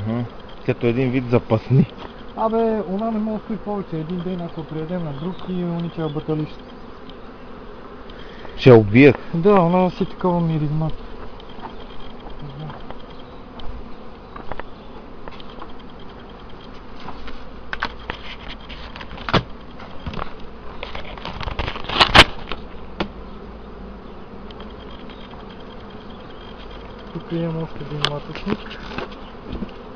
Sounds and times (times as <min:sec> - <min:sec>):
Speech: 0:00.1 - 0:06.6, 0:27.2 - 0:28.6.